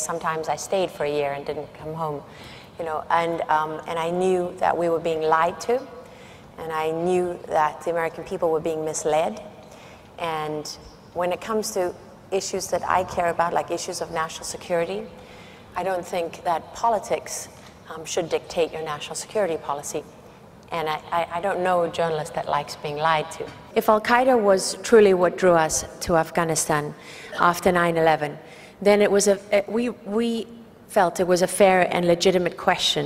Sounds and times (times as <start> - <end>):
Female speech, woman speaking: 0.0 - 5.9, 6.6 - 9.5, 10.2 - 15.1, 15.8 - 20.1, 20.7 - 33.0
Narration, monologue: 0.0 - 33.0.